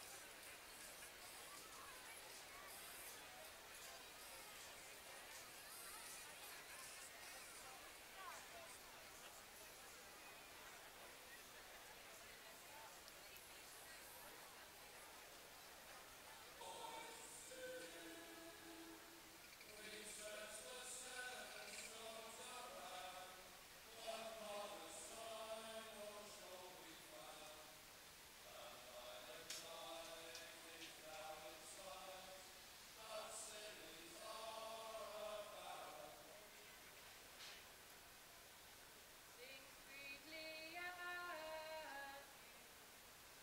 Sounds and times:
Speech: 0.0 - 27.8, 28.5 - 37.0.

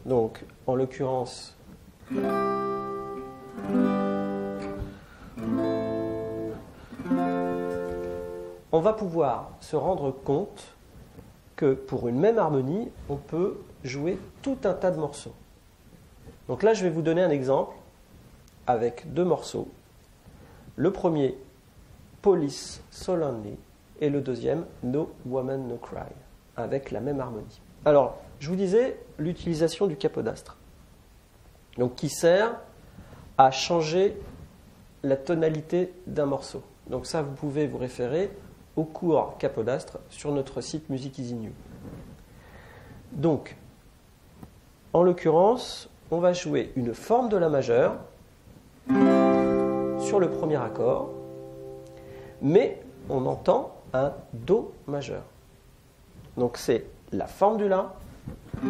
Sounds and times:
Speech: 0.0 - 1.6, 8.7 - 10.8, 11.6 - 15.4, 16.5 - 17.9, 18.6 - 19.8, 20.8 - 21.6, 22.2 - 30.6, 31.8 - 32.8, 33.4 - 34.4, 35.0 - 41.6, 43.1 - 43.7, 44.9 - 48.2, 50.0 - 51.1, 52.4 - 55.4, 56.3 - 58.1.

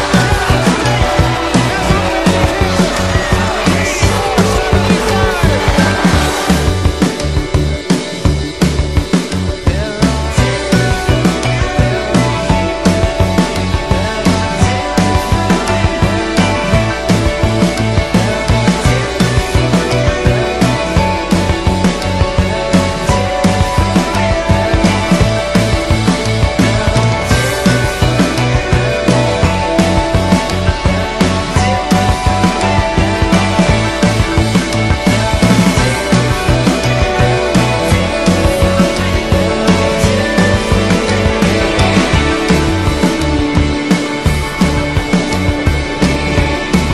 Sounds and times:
Music: 0.0 - 46.9.

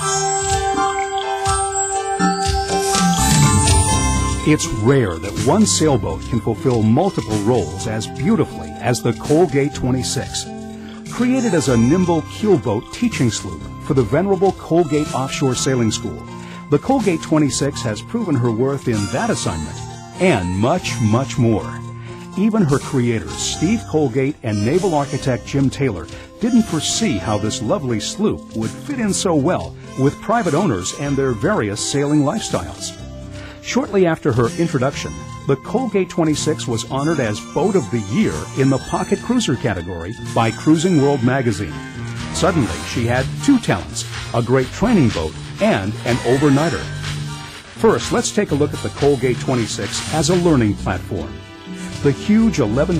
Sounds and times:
Music: 0.0 - 53.0
Speech: 4.4 - 10.5, 11.1 - 33.0, 33.6 - 47.0, 47.8 - 51.4, 52.0 - 53.0.

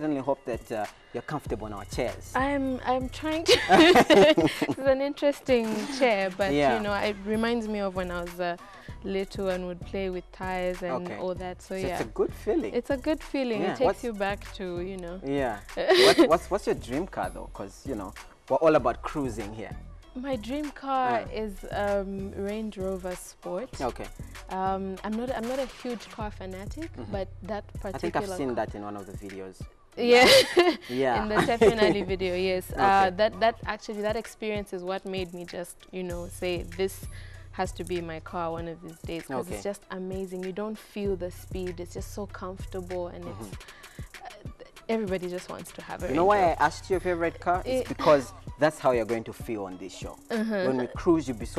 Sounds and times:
Speech: 0.0 - 37.0, 37.6 - 43.6, 44.2 - 51.5
Music: 0.0 - 51.5.

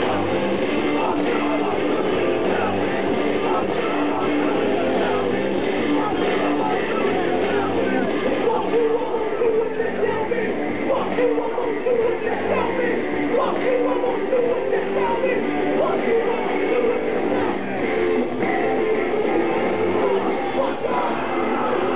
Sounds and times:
Crowd: 0.0 - 21.9
Singing: 0.0 - 21.9.

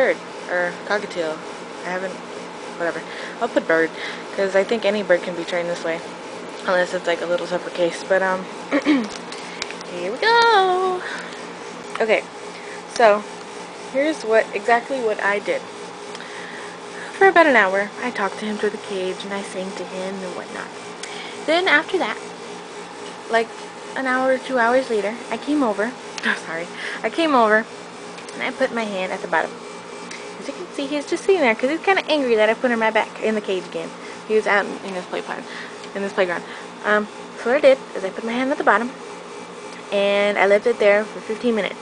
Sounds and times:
Speech: 0.0 - 2.2, 2.8 - 6.0, 6.6 - 8.5, 9.9 - 11.0, 12.0 - 12.3, 12.9 - 13.3, 13.9 - 15.6, 17.2 - 20.7, 21.5 - 22.2, 23.3 - 27.7, 28.3 - 29.6, 30.4 - 39.0, 39.9 - 41.8.

